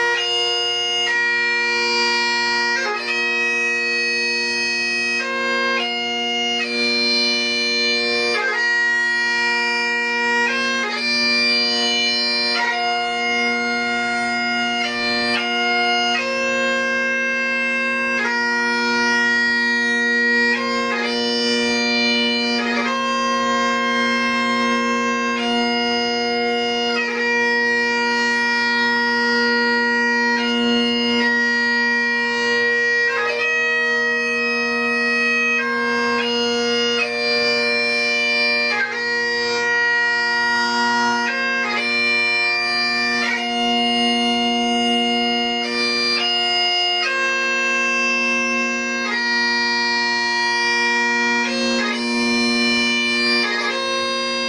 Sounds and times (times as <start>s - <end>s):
Bagpipes: 0.0s - 54.4s.